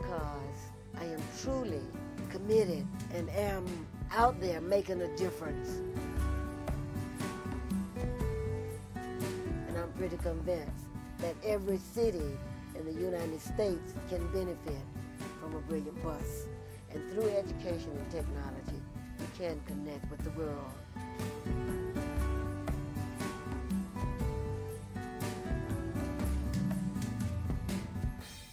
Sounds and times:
Speech: 0:00.0 - 0:05.8, 0:09.7 - 0:20.8
Music: 0:00.0 - 0:28.5.

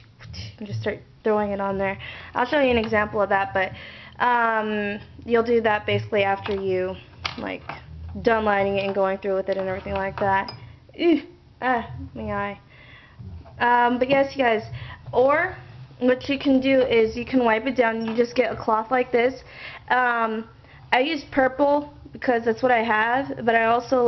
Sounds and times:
Inside, small room: 0:00.0 - 0:24.0
Speech: 0:00.2 - 0:12.6, 0:13.2 - 0:24.0.

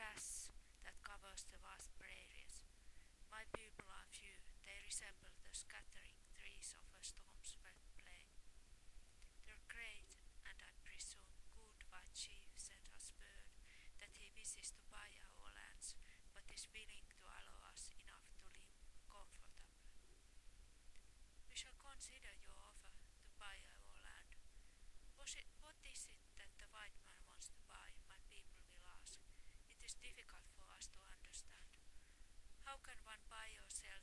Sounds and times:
Female speech, woman speaking: 0:00.0 - 0:02.6, 0:03.3 - 0:08.3, 0:09.4 - 0:19.7, 0:21.5 - 0:24.4, 0:25.2 - 0:31.8, 0:32.6 - 0:34.0.

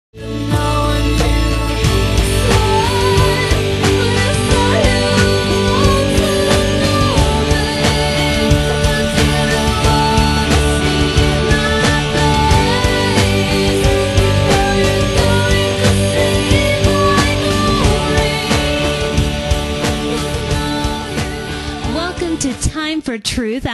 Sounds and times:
Music: 0:00.2 - 0:23.7
Singing: 0:00.3 - 0:22.3.

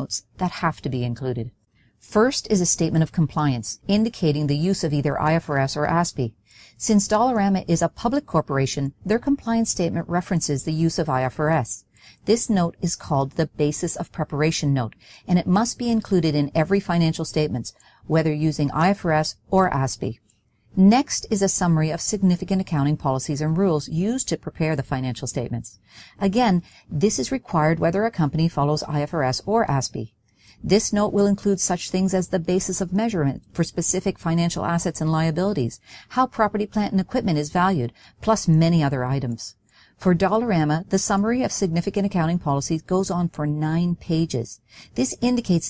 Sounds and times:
Narration, monologue: 0:00.0 - 0:45.7.

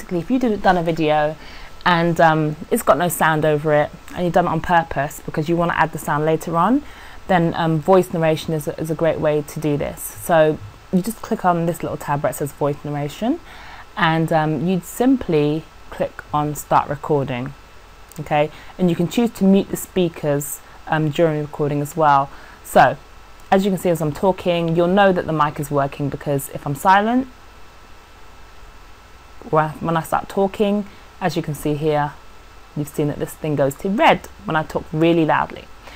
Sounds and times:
Speech: 0:00.0 - 0:13.4, 0:14.0 - 0:27.3, 0:29.4 - 0:32.2, 0:32.8 - 0:35.7.

